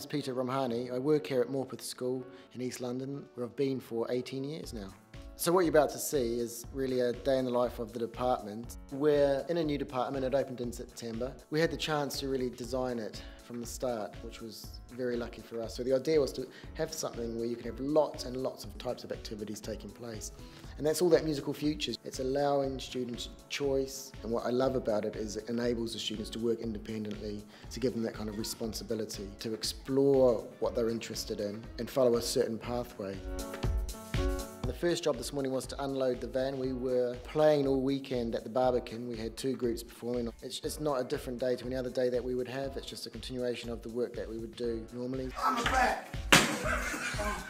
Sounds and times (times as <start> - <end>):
Speech: 0.0 - 33.2, 34.6 - 46.1
Music: 0.0 - 47.5.